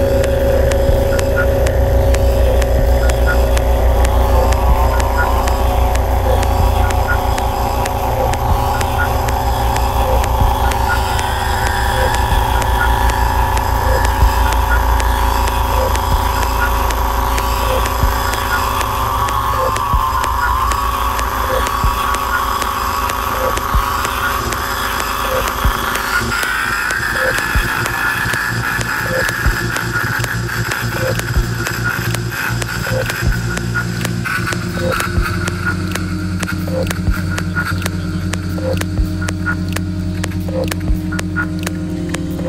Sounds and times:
Music: 0.0 - 42.4.

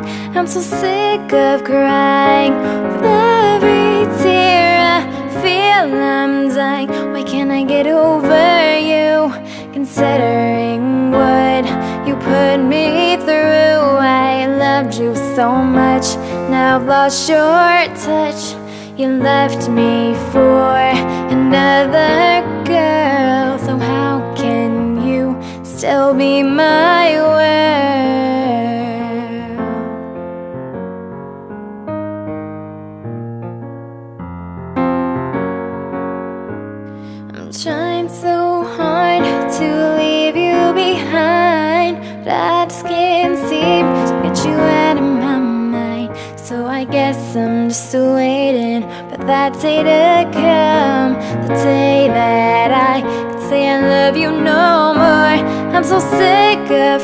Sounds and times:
Music: 0.0 - 57.0
Female singing: 0.2 - 29.9, 37.4 - 57.0.

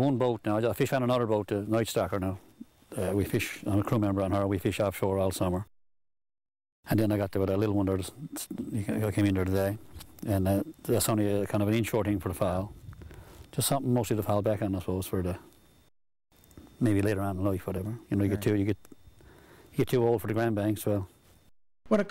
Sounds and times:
Speech: 0.0 - 5.7, 6.9 - 12.7, 13.5 - 15.5, 16.8 - 18.8, 19.8 - 21.1, 21.9 - 22.1.

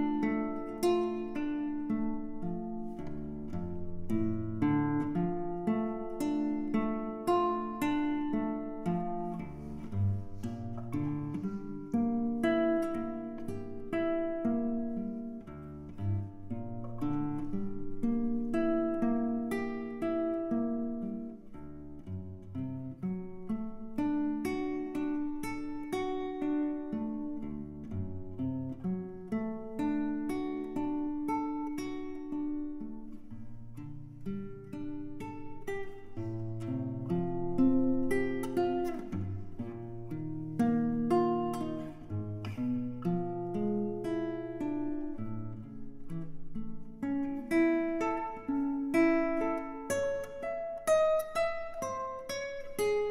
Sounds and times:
Acoustic guitar: 0.0 - 53.1
Strum: 0.0 - 53.1.

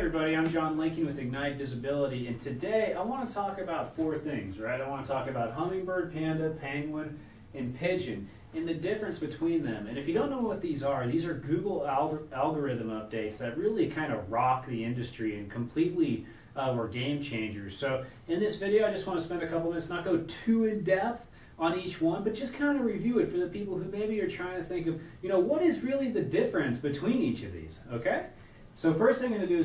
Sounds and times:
Speech: 0.0 - 29.6.

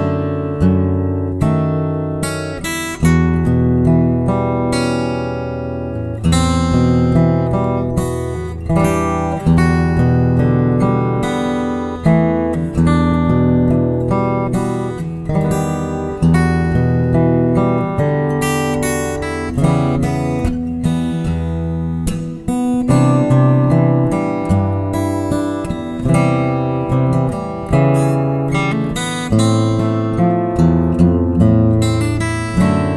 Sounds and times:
Guitar: 0.0 - 32.9.

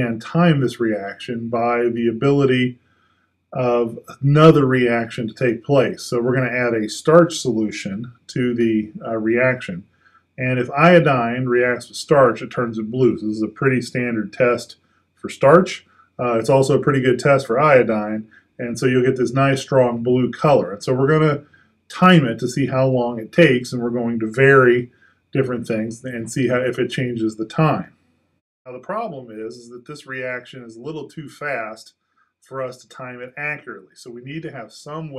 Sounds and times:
Speech: 0.0 - 2.8, 3.6 - 9.8, 10.4 - 27.9, 28.7 - 31.9, 32.5 - 35.1.

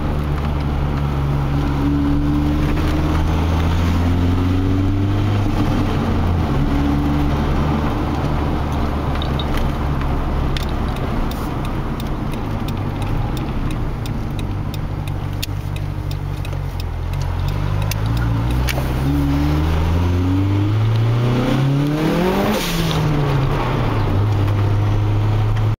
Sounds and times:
Car: 0.0 - 25.7
Outside, urban or manmade: 0.0 - 25.7.

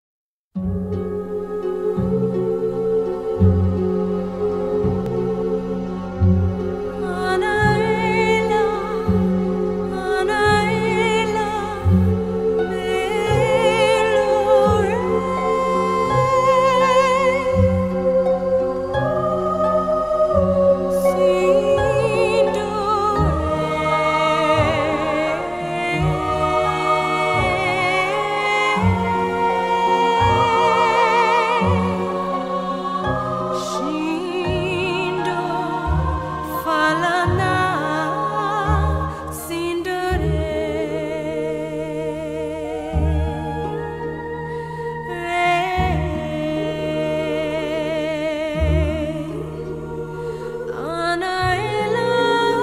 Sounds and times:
Tender music: 0.6 - 52.6.

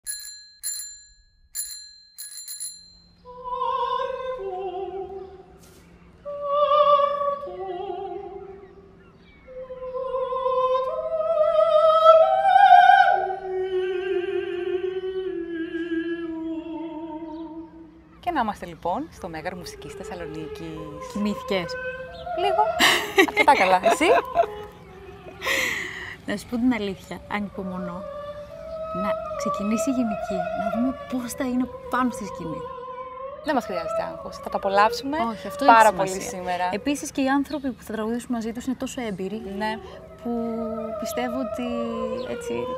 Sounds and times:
Bicycle bell: 0.0 - 3.3
Opera: 3.3 - 5.5, 6.2 - 8.6, 9.5 - 18.0, 19.9 - 26.2, 27.5 - 36.8, 39.4 - 42.7.

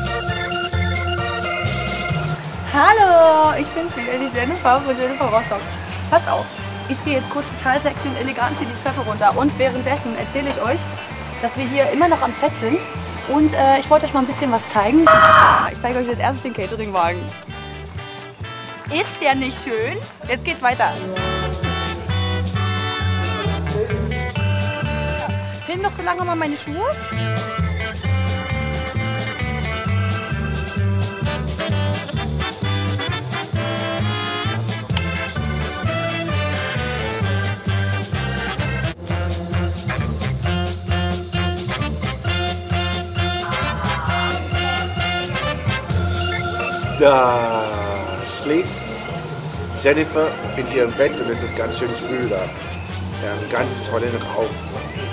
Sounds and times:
Music: 0.0 - 55.1
Speech: 2.7 - 17.3, 18.9 - 21.6, 25.2 - 27.0, 47.0 - 48.8, 49.8 - 52.6, 53.2 - 54.6.

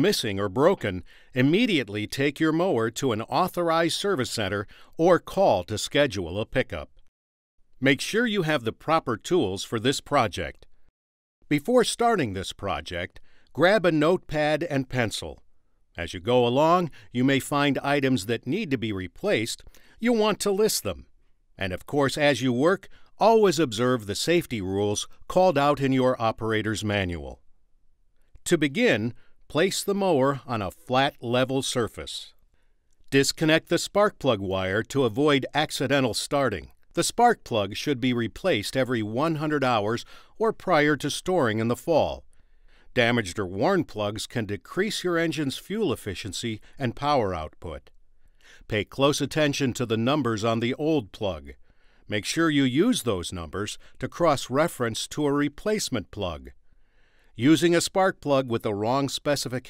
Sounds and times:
Speech: 0.0 - 6.9, 7.8 - 10.7, 11.5 - 15.4, 16.0 - 27.4, 28.4 - 32.4, 33.1 - 42.3, 42.9 - 47.9, 48.6 - 56.6, 57.4 - 59.6.

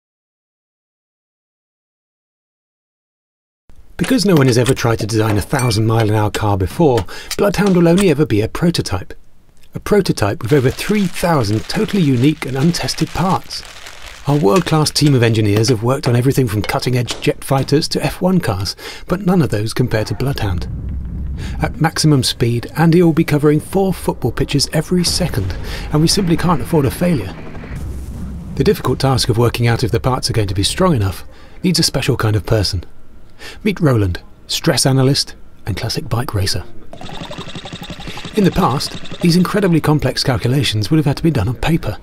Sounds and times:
Speech: 4.0 - 20.7, 21.5 - 27.4, 28.6 - 32.9, 33.6 - 36.9, 38.4 - 42.0.

